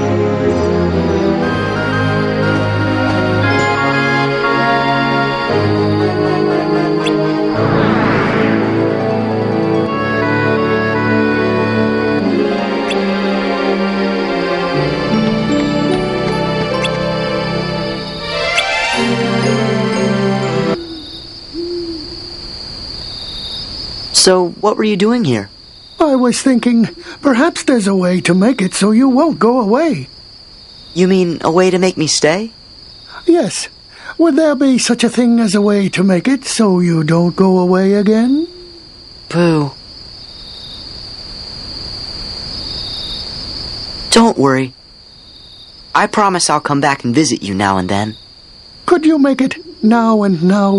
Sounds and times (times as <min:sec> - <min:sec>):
Music: 0:00.0 - 0:21.2.